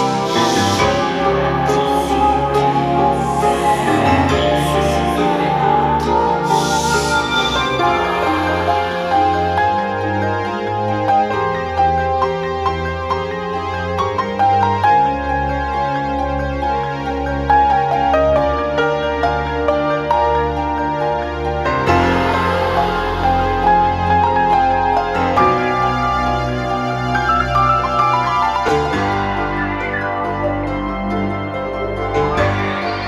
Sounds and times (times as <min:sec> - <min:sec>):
Background music: 0:00.0 - 0:33.0.